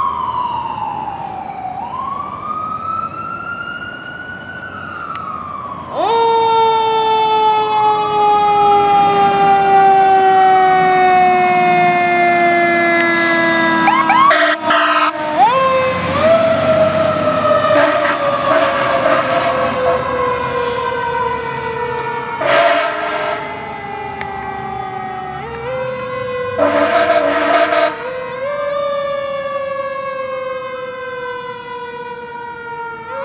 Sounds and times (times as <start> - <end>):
Fire engine, fire truck (siren): 0.0 - 33.2.